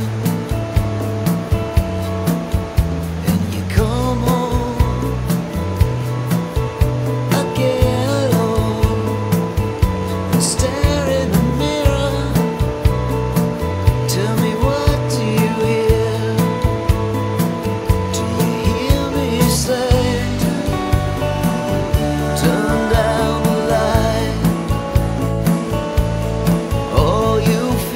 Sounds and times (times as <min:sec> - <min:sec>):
Music: 0:00.0 - 0:27.9.